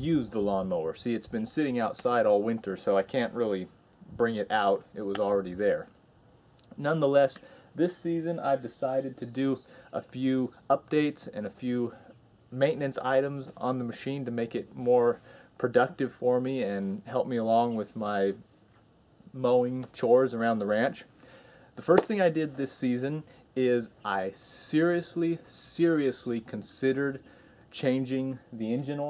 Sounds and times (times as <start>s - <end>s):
Speech: 0.0s - 6.0s, 6.7s - 18.5s, 19.3s - 21.1s, 21.8s - 29.0s.